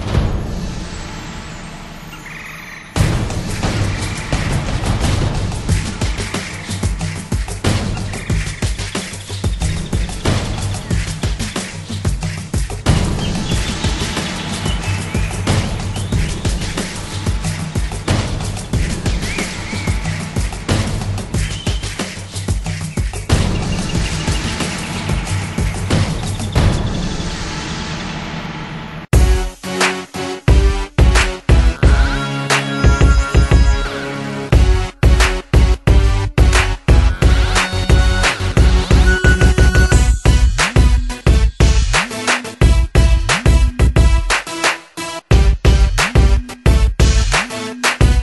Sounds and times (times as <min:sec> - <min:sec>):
Soundtrack music: 0:00.0 - 0:48.2
Theme music: 0:00.0 - 0:48.2.